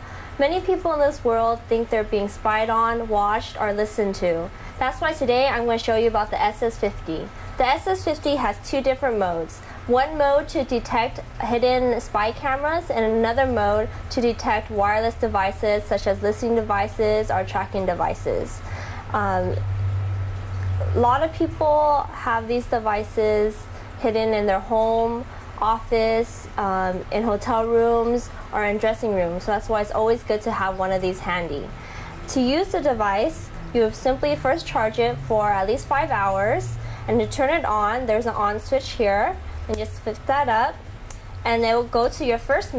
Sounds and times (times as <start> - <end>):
Speech: 0.4 - 19.6, 20.8 - 31.7, 32.3 - 40.8, 41.5 - 42.7.